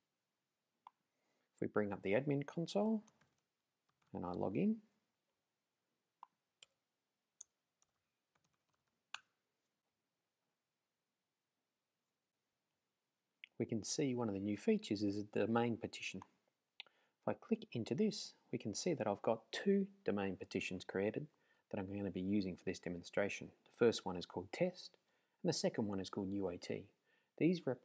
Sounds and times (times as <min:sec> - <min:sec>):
Speech: 0:01.6 - 0:03.1, 0:04.1 - 0:04.9, 0:13.4 - 0:16.3, 0:17.2 - 0:27.8.